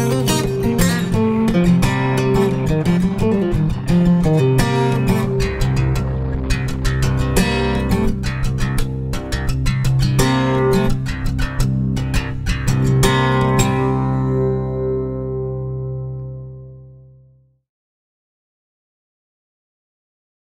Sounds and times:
Music: 0:00.0 - 0:17.6.

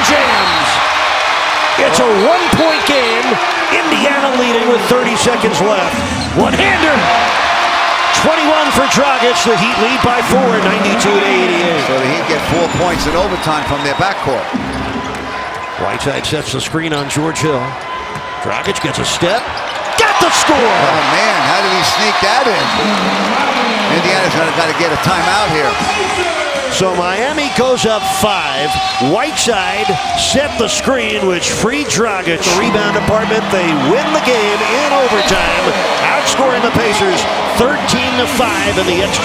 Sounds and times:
Speech: 0:01.8 - 0:07.2, 0:08.1 - 0:14.5, 0:15.8 - 0:17.8, 0:18.4 - 0:22.8, 0:23.9 - 0:39.2.

